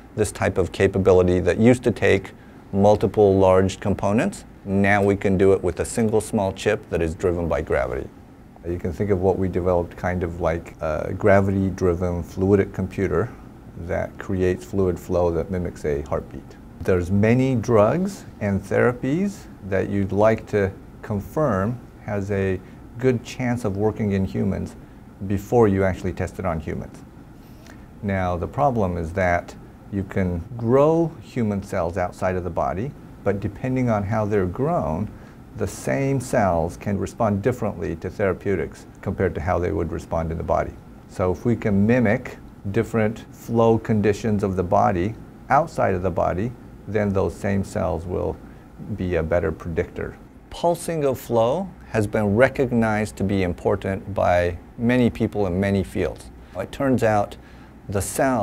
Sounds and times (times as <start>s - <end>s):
Speech: 0.0s - 27.1s, 28.0s - 58.4s.